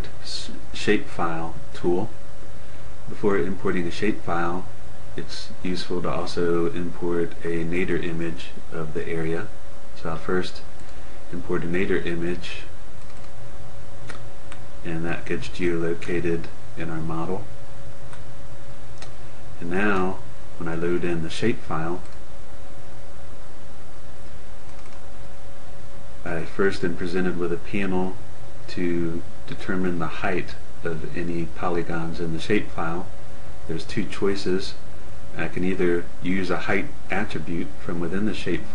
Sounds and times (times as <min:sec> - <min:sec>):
Speech: 0:00.0 - 0:02.2, 0:03.1 - 0:10.7, 0:11.3 - 0:12.8, 0:14.8 - 0:17.6, 0:19.6 - 0:22.1, 0:26.2 - 0:38.7.